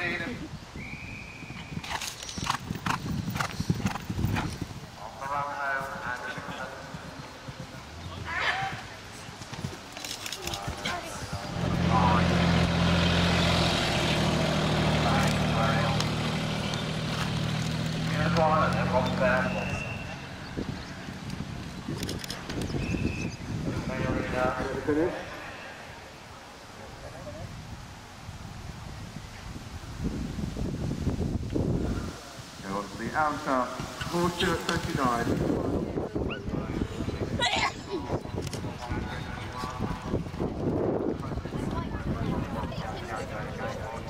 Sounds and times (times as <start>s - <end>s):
Clip-clop: 1.3s - 11.6s, 15.0s - 23.4s, 33.7s - 44.1s.